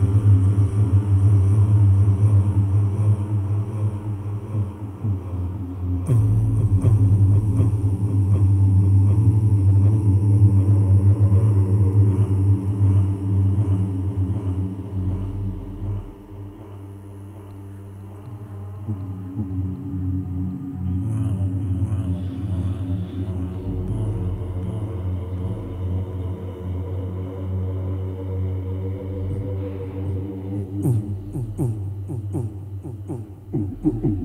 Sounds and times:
Music: 0.0 - 34.2.

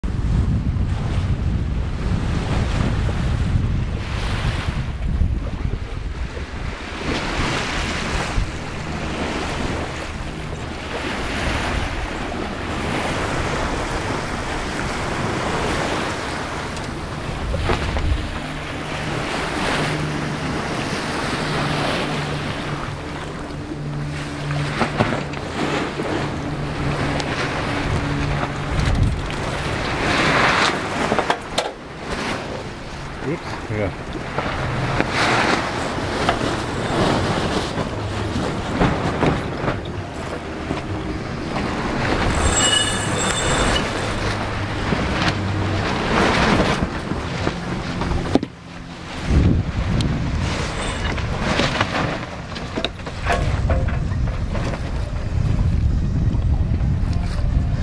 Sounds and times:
Wind noise (microphone): 0.0 - 32.7, 49.2 - 57.8
Waves, surf: 0.0 - 57.8.

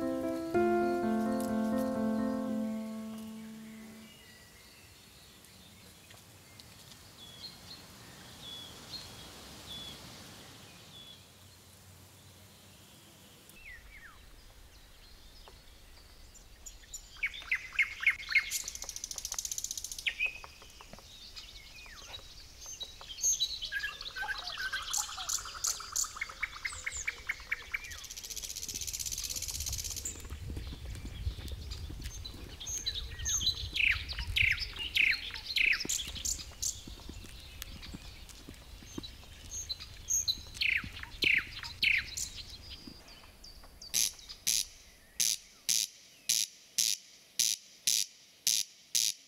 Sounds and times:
Environmental noise: 0.0 - 49.2.

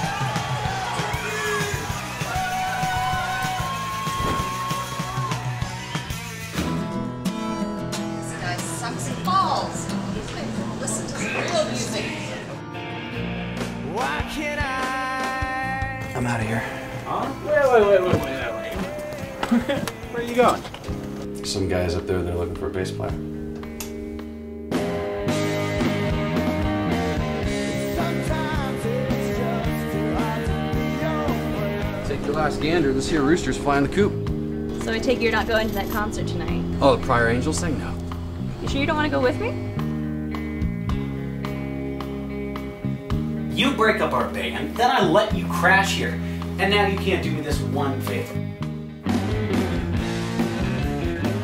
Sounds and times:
Music: 0.0 - 51.4.

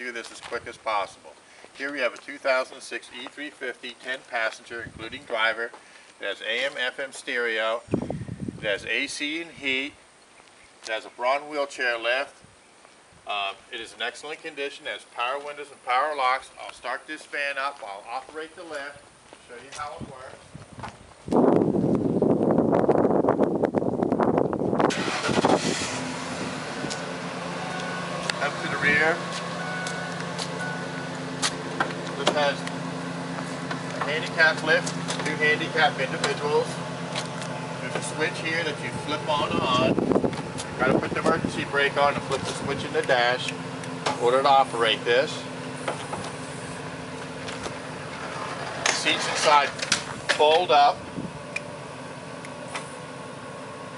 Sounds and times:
Speech: 0.0 - 7.9, 8.6 - 10.0, 10.8 - 12.4, 13.3 - 20.5, 28.4 - 29.2, 32.2 - 32.7, 34.0 - 36.8, 37.8 - 40.0, 40.8 - 43.6, 44.2 - 45.5, 48.9 - 51.0.

